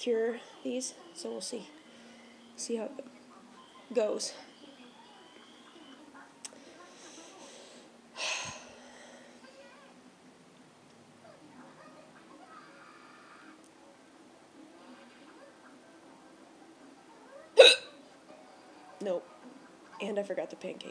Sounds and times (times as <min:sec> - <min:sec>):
Hiccup: 0:17.6 - 0:18.0
Speech: 0:19.0 - 0:20.9.